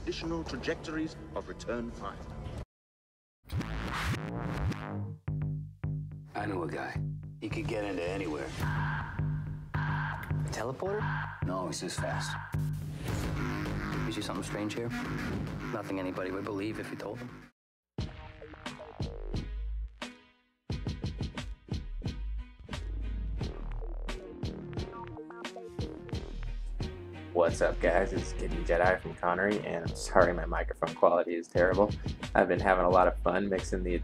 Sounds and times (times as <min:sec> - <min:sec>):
Speech: 0:00.0 - 0:02.2, 0:06.4 - 0:08.6, 0:10.5 - 0:12.4, 0:14.1 - 0:15.0, 0:15.7 - 0:17.3, 0:27.4 - 0:34.0
Music: 0:03.5 - 0:34.0.